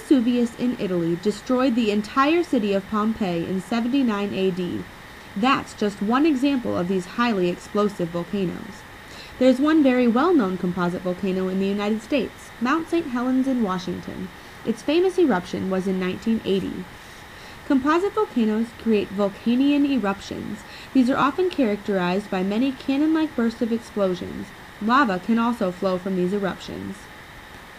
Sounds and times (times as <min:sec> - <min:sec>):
Speech: 0:00.0 - 0:04.8, 0:05.4 - 0:08.8, 0:09.4 - 0:16.9, 0:17.6 - 0:27.0.